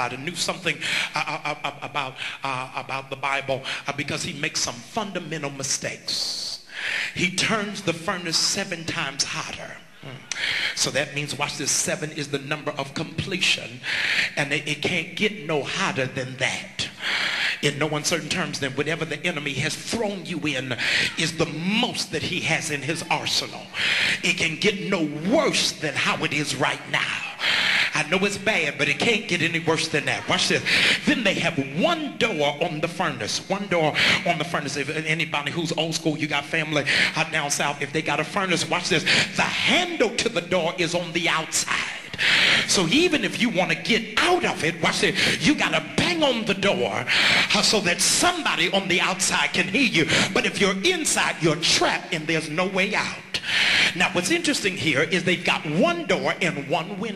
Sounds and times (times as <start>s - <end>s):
Speech: 0.0s - 57.1s.